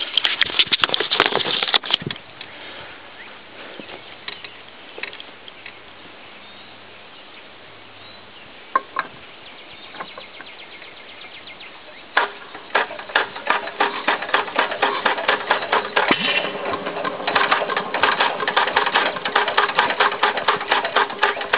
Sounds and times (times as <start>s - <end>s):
Engine starting: 12.2s - 21.5s.